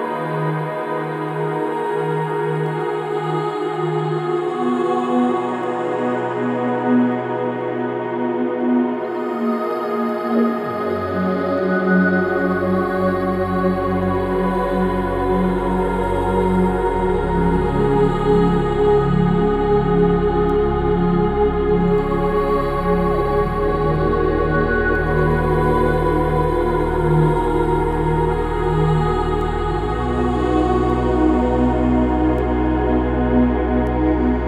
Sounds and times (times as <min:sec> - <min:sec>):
Music: 0:00.0 - 0:34.4.